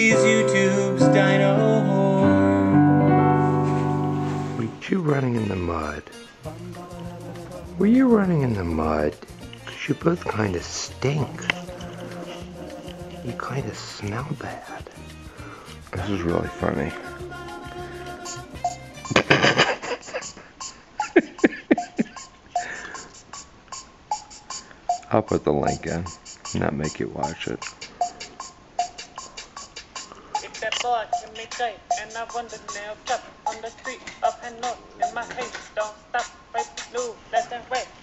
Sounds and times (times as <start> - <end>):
Music: 0.0 - 19.6, 24.1 - 37.9
Speech: 4.6 - 6.1, 7.8 - 11.5, 13.3 - 14.8, 15.9 - 17.1, 25.1 - 27.6.